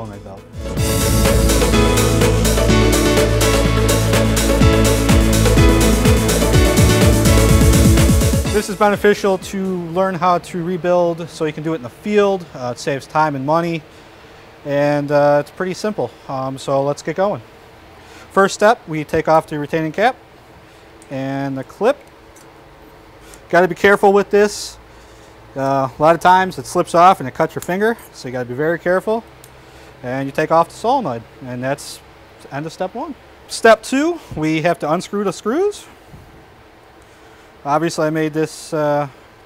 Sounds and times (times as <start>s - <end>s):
Speech: 0.0s - 0.4s, 8.6s - 13.8s, 14.7s - 17.5s, 18.3s - 20.2s, 21.1s - 22.1s, 23.5s - 24.8s, 25.6s - 29.3s, 30.0s - 36.0s, 37.6s - 39.2s.